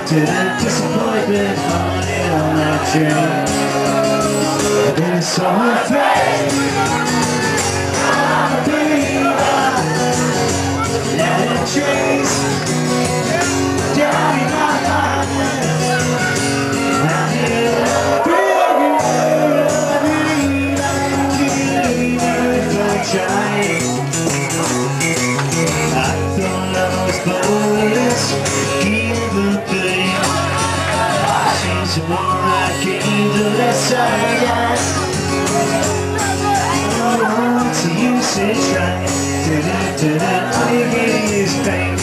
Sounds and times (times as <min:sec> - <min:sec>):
Music: 0:00.0 - 0:42.0.